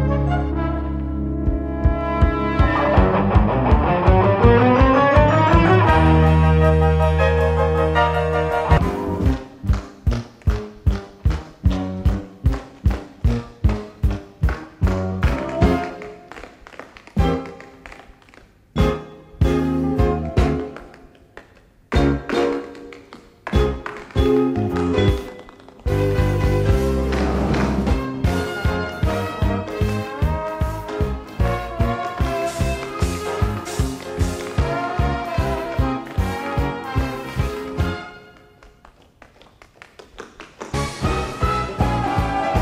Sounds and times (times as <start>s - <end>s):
Music: 0.0s - 39.0s, 39.8s - 42.6s.